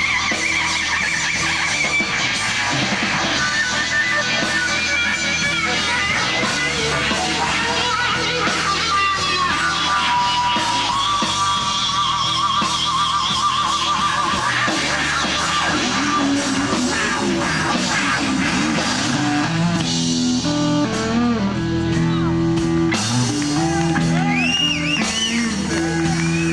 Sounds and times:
Blues: 0:00.0 - 0:26.5
Drum kit: 0:00.0 - 0:26.5
Guitar: 0:00.0 - 0:26.5
Speech: 0:21.9 - 0:22.5.

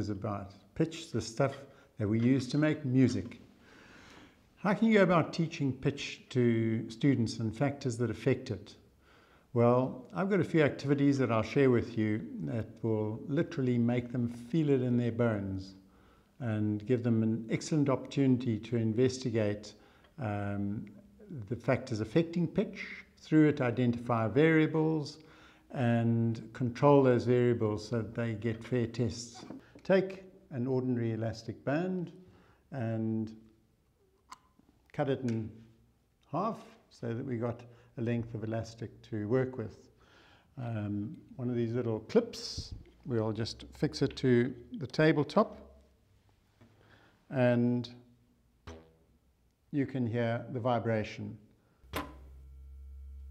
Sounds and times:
Speech: 0:00.0 - 0:03.4, 0:04.6 - 0:08.8, 0:09.6 - 0:15.8, 0:16.4 - 0:33.5, 0:34.9 - 0:35.6, 0:36.3 - 0:39.9, 0:40.6 - 0:45.7, 0:47.3 - 0:48.0, 0:49.7 - 0:51.5.

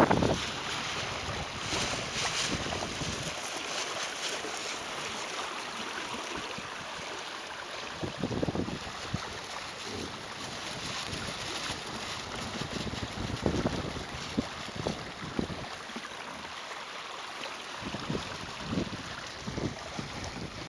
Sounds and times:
Boat, Water vehicle: 0:00.0 - 0:20.6.

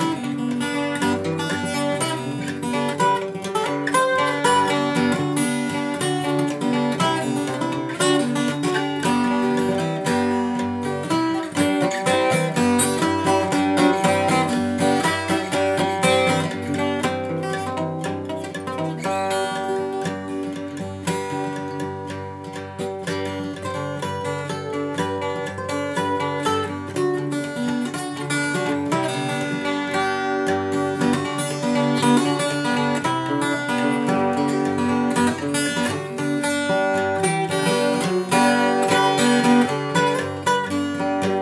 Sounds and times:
Acoustic guitar: 0:00.0 - 0:41.4
Strum: 0:00.0 - 0:41.4.

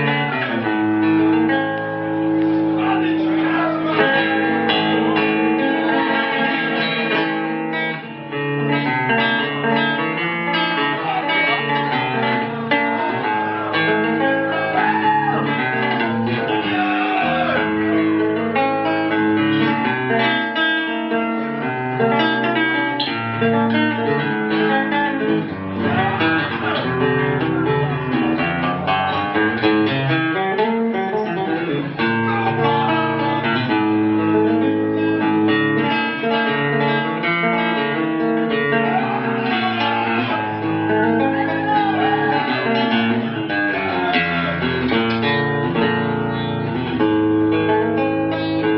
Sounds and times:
Electric guitar: 0:00.0 - 0:48.7.

